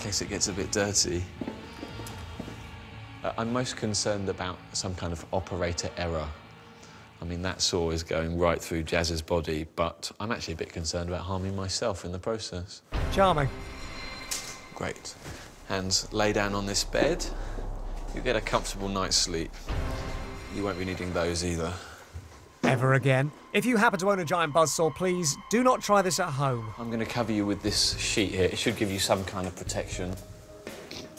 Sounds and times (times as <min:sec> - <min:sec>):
Music: 0:00.0 - 0:09.7, 0:12.9 - 0:31.1
Speech: 0:07.2 - 0:13.5, 0:22.6 - 0:30.2.